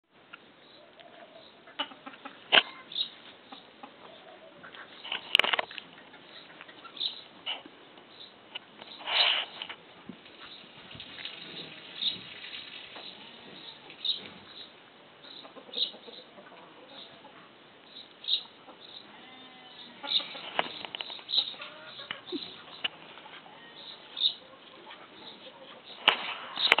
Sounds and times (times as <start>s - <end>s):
Livestock, farm animals, working animals: 0.3s - 26.8s.